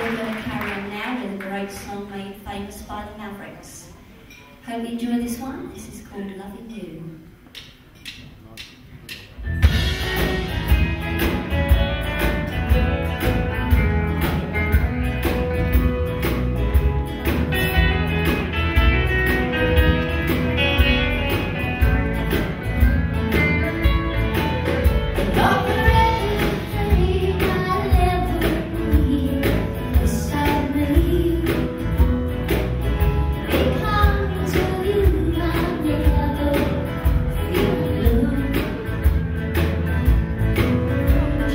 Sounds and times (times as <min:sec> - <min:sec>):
Music: 0:00.0 - 0:02.7, 0:07.6 - 0:41.5.